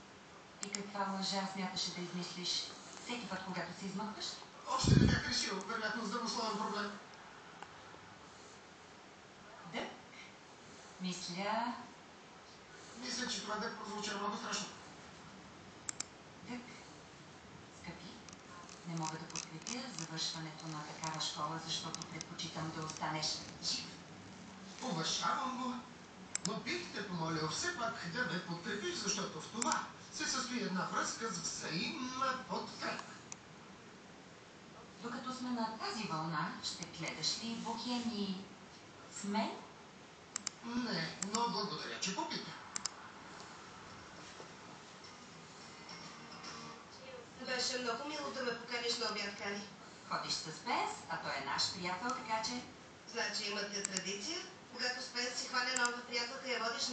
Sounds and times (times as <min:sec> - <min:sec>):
Speech: 0:00.6 - 0:07.1, 0:11.0 - 0:12.0, 0:12.8 - 0:14.8, 0:17.8 - 0:24.0, 0:24.8 - 0:33.2, 0:35.0 - 0:38.5, 0:47.0 - 0:56.9.